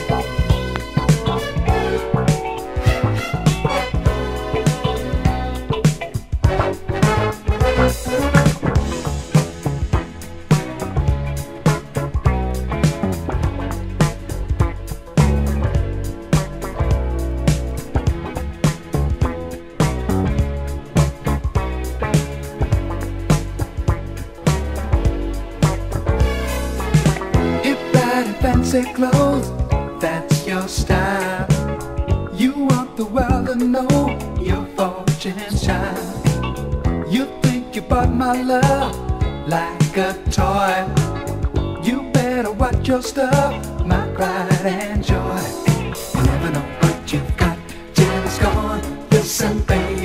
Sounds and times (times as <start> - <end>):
Music: 0.0 - 50.0.